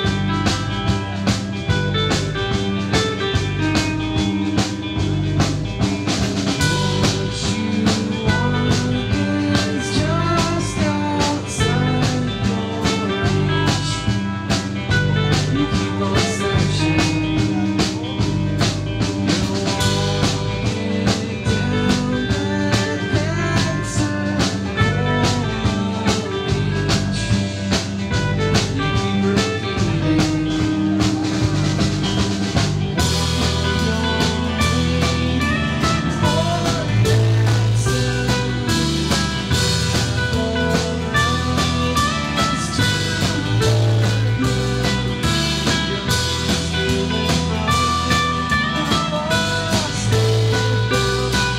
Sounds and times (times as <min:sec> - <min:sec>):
Music: 0:00.0 - 0:51.5.